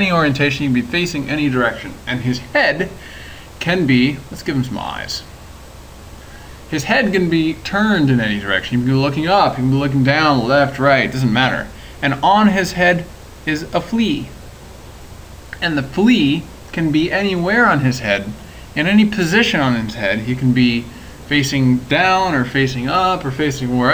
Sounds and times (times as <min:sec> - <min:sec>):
Speech: 0:00.0 - 0:03.0, 0:03.6 - 0:05.3, 0:06.7 - 0:14.4, 0:15.6 - 0:23.9.